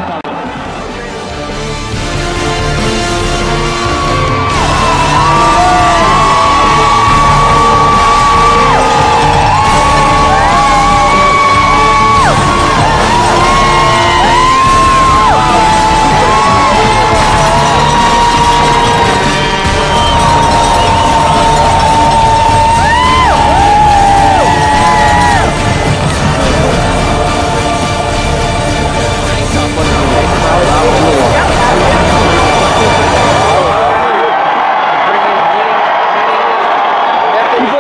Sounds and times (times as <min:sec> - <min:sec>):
Music: 0:00.0 - 0:37.6
Yell: 0:04.5 - 0:25.5.